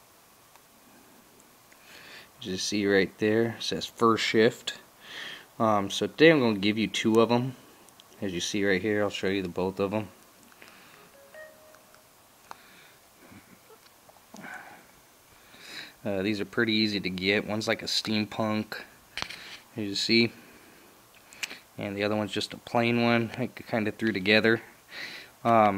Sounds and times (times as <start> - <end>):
Speech: 2.4 - 4.9, 5.6 - 7.6, 8.2 - 10.2, 16.0 - 18.9, 19.8 - 20.4, 21.8 - 24.7, 25.4 - 25.7.